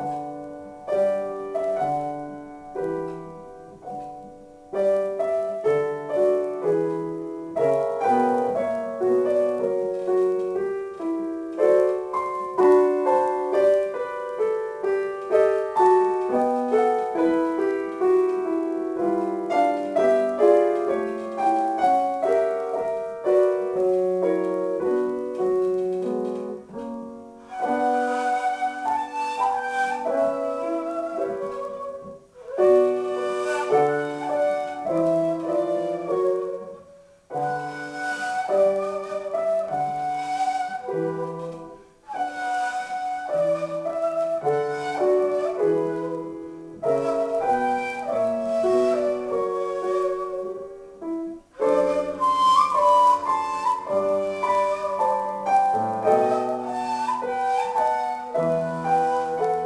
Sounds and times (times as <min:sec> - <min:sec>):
Classical music: 0:00.0 - 0:59.6
Flute: 0:00.0 - 0:59.6
Piano: 0:00.0 - 0:59.6.